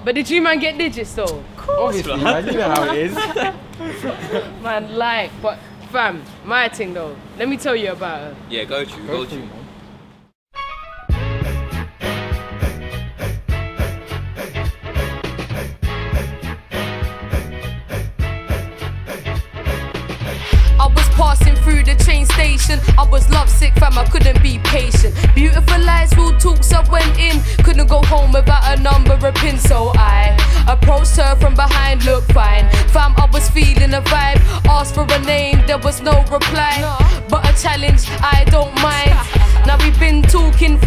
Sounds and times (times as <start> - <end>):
Music: 10.5 - 40.8.